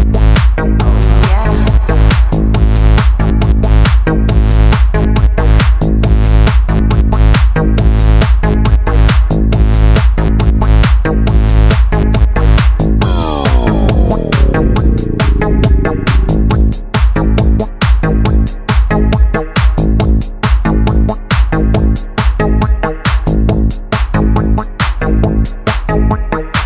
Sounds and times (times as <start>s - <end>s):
Techno: 0.0s - 18.4s
House music: 0.6s - 4.1s, 13.0s - 17.3s.